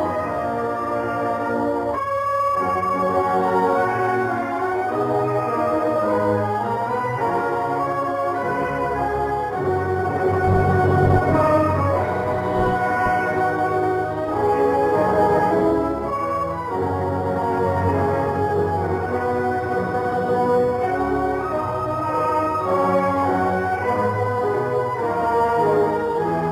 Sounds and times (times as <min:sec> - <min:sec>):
Music: 0:00.0 - 0:26.5.